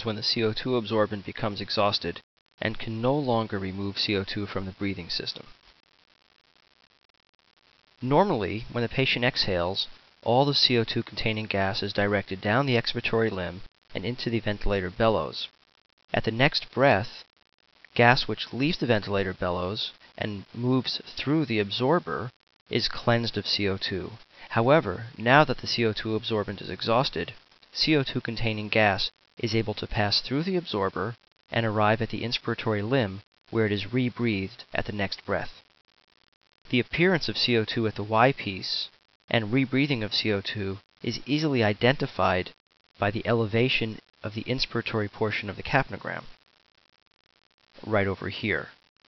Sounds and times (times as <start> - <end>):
Speech: 0.0 - 5.5, 8.0 - 15.5, 16.1 - 17.3, 17.9 - 35.6, 36.7 - 46.3, 47.8 - 48.8.